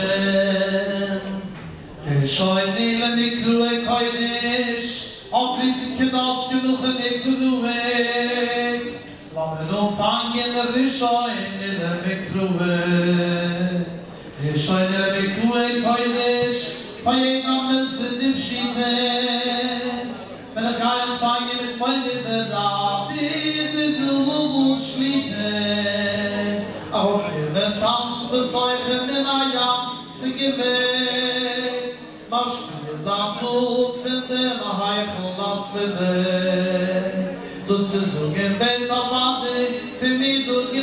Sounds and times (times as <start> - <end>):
Male singing: 0.0 - 40.8.